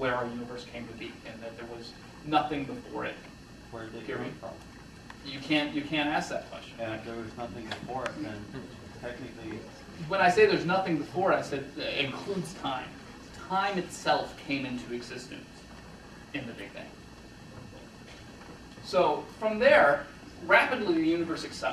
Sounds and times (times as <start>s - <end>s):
Speech: 0.0s - 4.6s, 5.2s - 15.5s, 16.4s - 16.9s, 18.8s - 21.7s.